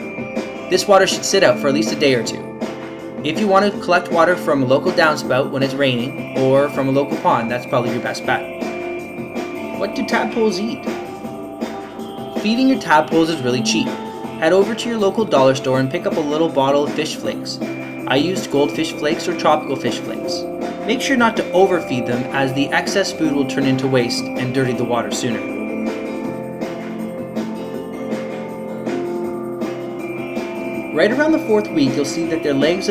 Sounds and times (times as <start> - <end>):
Music: 0.0 - 32.9
Speech: 0.7 - 2.4, 3.2 - 8.5, 9.8 - 11.0, 12.4 - 25.5, 31.0 - 32.9.